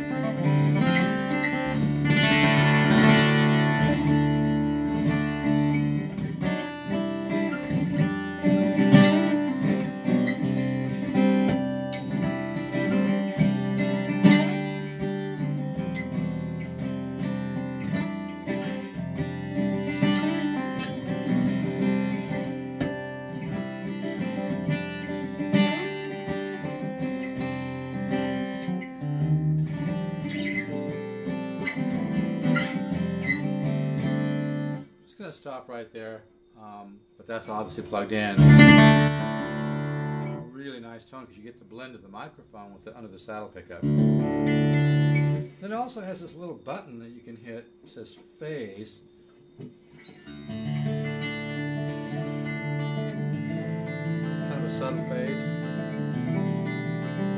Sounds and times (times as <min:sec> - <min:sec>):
Electric guitar: 0:00.0 - 0:34.8, 0:38.4 - 0:40.4, 0:43.8 - 0:45.4, 0:50.0 - 0:57.3
Strum: 0:00.0 - 0:57.3.